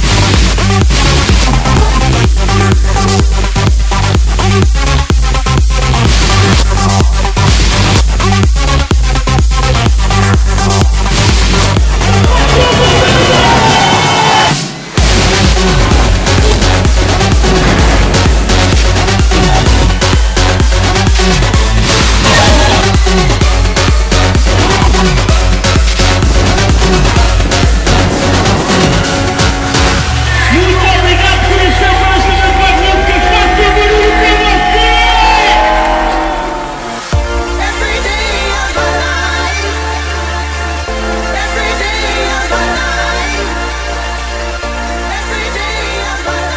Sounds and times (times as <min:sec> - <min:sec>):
Electronic dance music: 0:00.0 - 0:46.5.